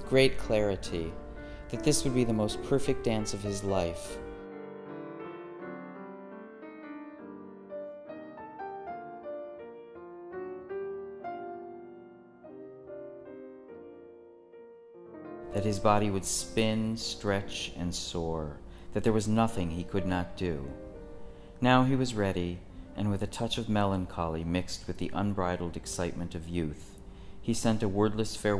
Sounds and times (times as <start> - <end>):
Speech: 0.0 - 4.2, 15.6 - 20.8, 21.6 - 28.6
Music: 0.0 - 28.6.